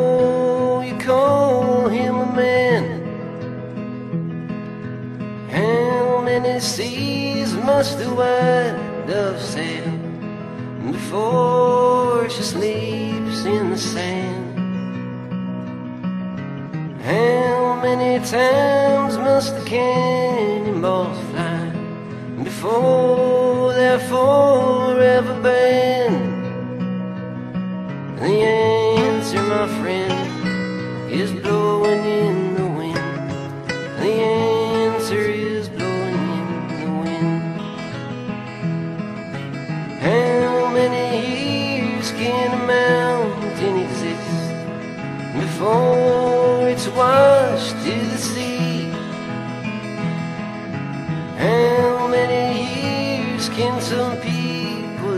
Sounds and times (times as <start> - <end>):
Music: 0.0 - 55.1.